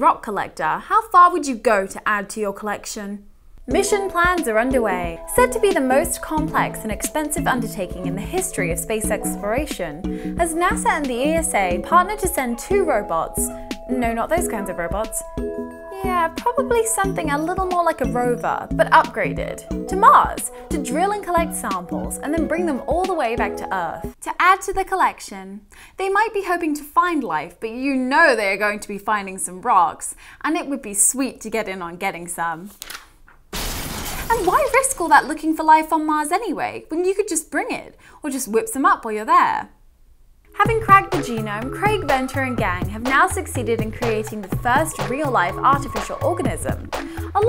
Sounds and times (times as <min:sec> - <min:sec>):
Speech: 0:00.0 - 0:15.3, 0:15.9 - 0:32.7, 0:34.3 - 0:39.7, 0:40.6 - 0:47.4
Music: 0:03.6 - 0:24.2, 0:40.5 - 0:47.4.